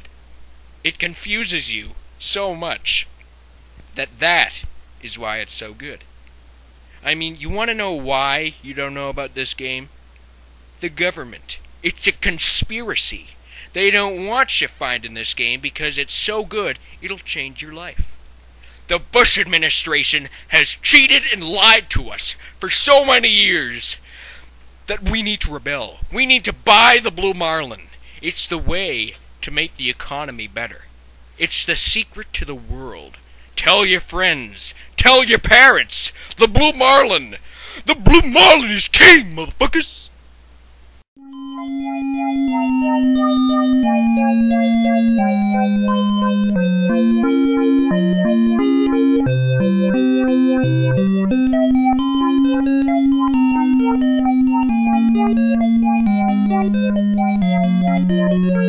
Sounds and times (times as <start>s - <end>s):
Speech: 0.9s - 3.1s, 4.0s - 6.1s, 7.0s - 9.9s, 10.8s - 18.2s, 18.9s - 24.0s, 24.9s - 40.1s.